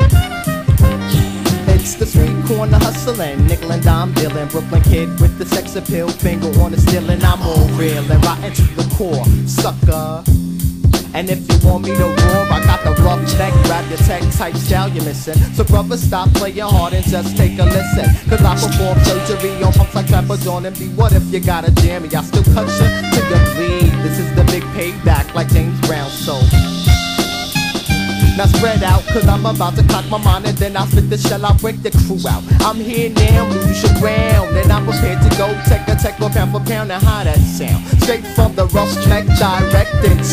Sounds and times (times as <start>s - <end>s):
Music: 0.0s - 40.3s.